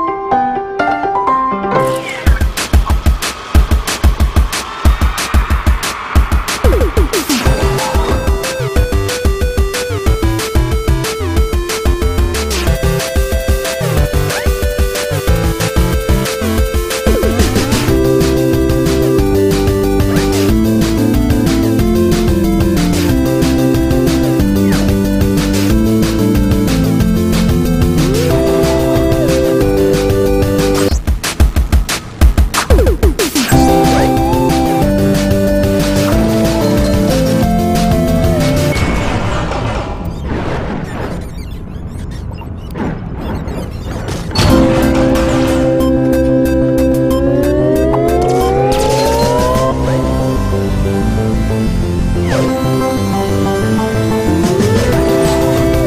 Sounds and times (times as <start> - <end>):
Music: 0.0 - 39.5, 44.3 - 55.8.